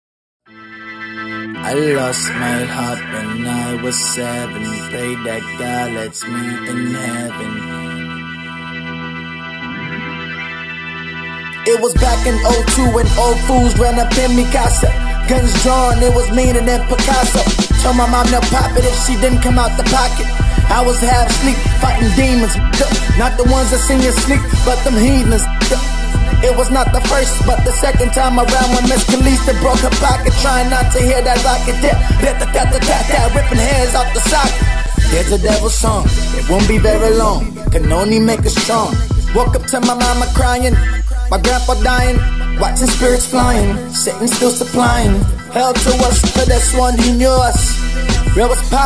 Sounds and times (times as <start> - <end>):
Soundtrack music: 0.5 - 3.3, 6.4 - 48.8.